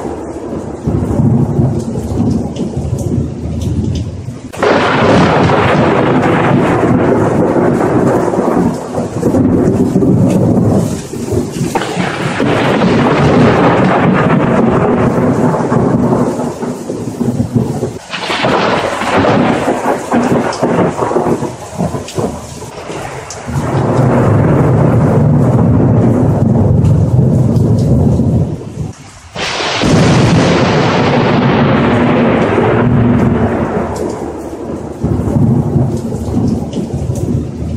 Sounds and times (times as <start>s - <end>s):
Crackle: 0.0s - 37.7s.